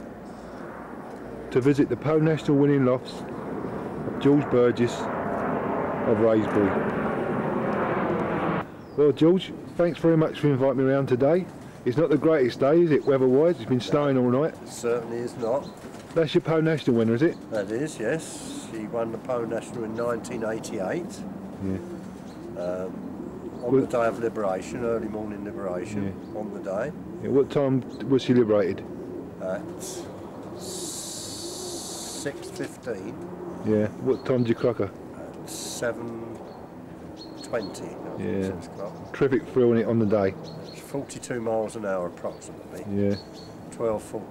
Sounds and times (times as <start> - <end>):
Chirp, tweet: 8.7 - 9.1, 19.7 - 20.4, 22.2 - 24.0, 36.4 - 37.8, 38.6 - 43.8.